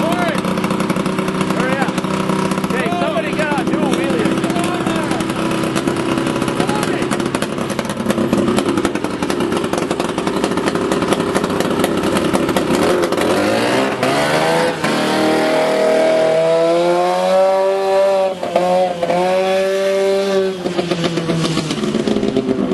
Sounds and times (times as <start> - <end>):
Speech: 0.0 - 0.4, 1.6 - 2.0, 2.7 - 5.3, 6.6 - 7.1.